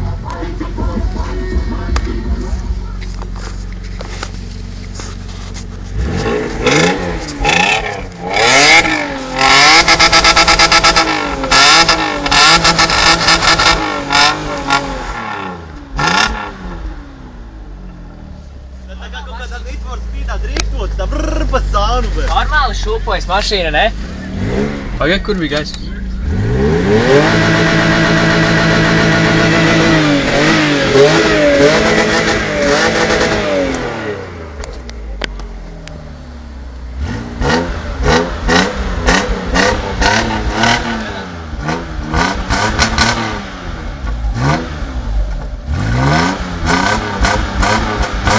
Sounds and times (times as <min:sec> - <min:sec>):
Car: 0:00.0 - 0:48.3
Accelerating, revving, vroom: 0:06.0 - 0:16.9, 0:24.0 - 0:25.2, 0:26.2 - 0:34.4, 0:37.0 - 0:43.8, 0:44.4 - 0:48.3
Speech: 0:18.8 - 0:24.0, 0:25.0 - 0:26.2, 0:41.0 - 0:41.3.